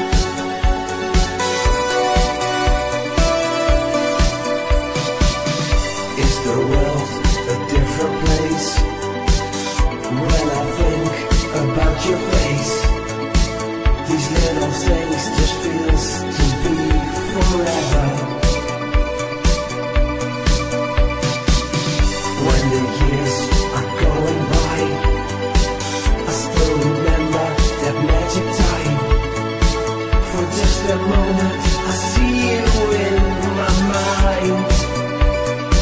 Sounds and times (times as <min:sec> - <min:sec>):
Disco: 0:00.0 - 0:35.8
Electronic music: 0:00.0 - 0:35.8.